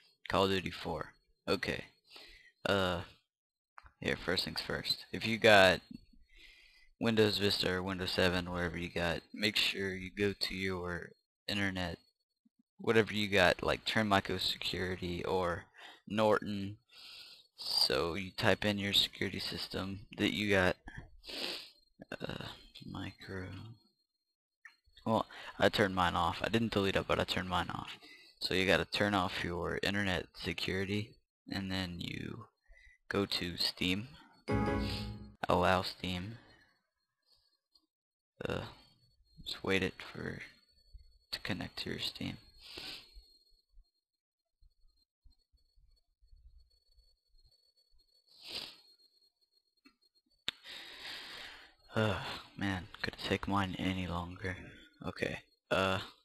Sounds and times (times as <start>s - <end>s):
Speech: 0.3s - 1.9s, 2.7s - 3.1s, 4.0s - 6.0s, 7.0s - 12.0s, 12.8s - 16.8s, 17.6s - 21.0s, 22.0s - 23.7s, 25.0s - 32.5s, 33.1s - 36.4s, 38.4s - 38.8s, 39.4s - 40.5s, 41.4s - 42.4s, 51.9s - 56.2s.